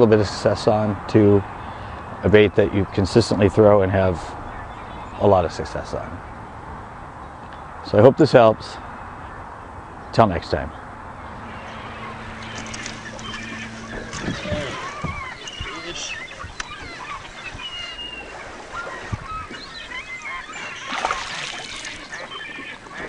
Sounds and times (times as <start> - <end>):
Speech: 0.0 - 1.4, 2.2 - 4.4, 5.2 - 6.2, 7.8 - 8.8, 10.1 - 10.8
Outside, rural or natural: 0.0 - 23.0
Animal: 11.4 - 23.0.